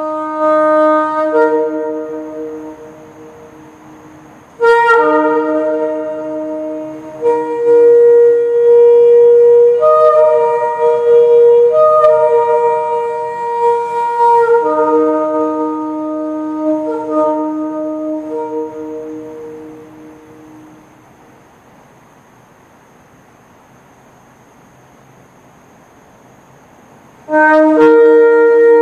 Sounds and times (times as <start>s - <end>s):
Wind instrument, woodwind instrument: 0.0s - 21.0s, 27.3s - 28.8s.